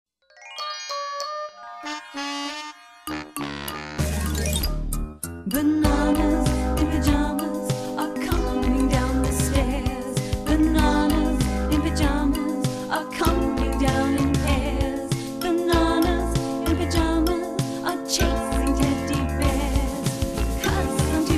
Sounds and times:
Music: 0.2s - 21.3s.

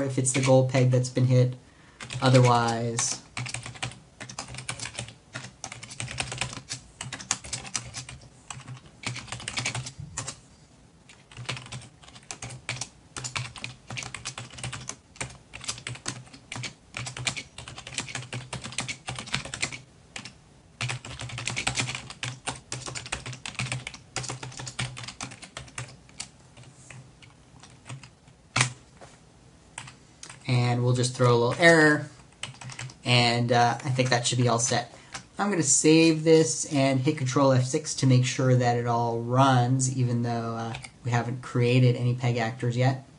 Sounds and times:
Typing: 2.0s - 10.4s, 11.1s - 28.8s, 32.4s - 33.0s.

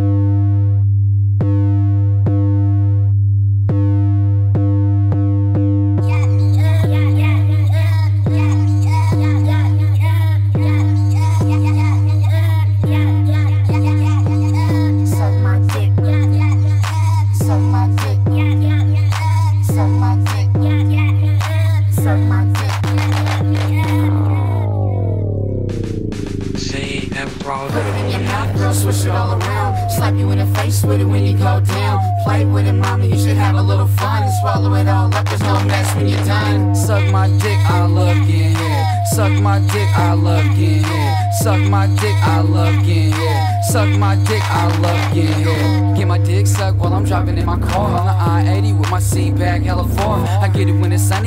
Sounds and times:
Hip hop music: 3.7s - 51.2s.

